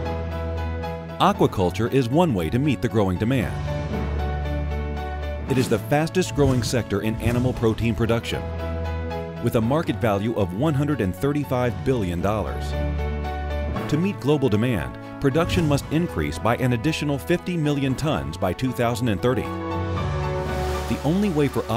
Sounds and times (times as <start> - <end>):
Music: 0.0 - 21.7
Speech: 1.2 - 3.6, 5.5 - 8.4, 9.4 - 12.8, 13.9 - 19.6, 20.9 - 21.7.